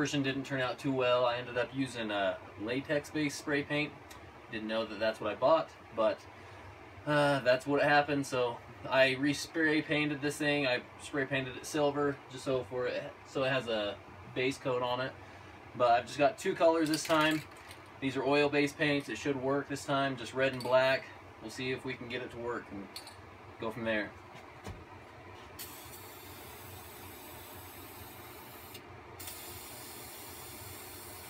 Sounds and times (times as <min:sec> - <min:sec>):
Speech: 0:00.0 - 0:06.2, 0:07.1 - 0:15.2, 0:15.8 - 0:23.0, 0:23.6 - 0:24.2
Spray: 0:25.6 - 0:31.3.